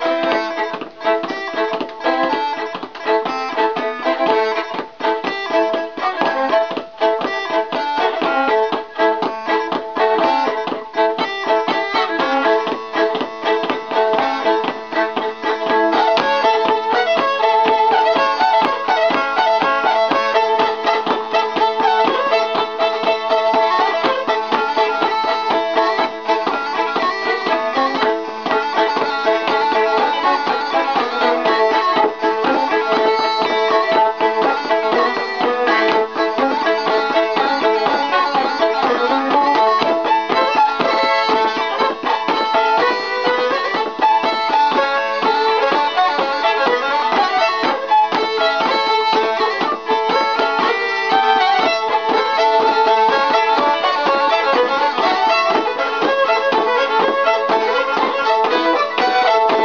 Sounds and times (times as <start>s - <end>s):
Violin, fiddle: 0.0s - 59.6s.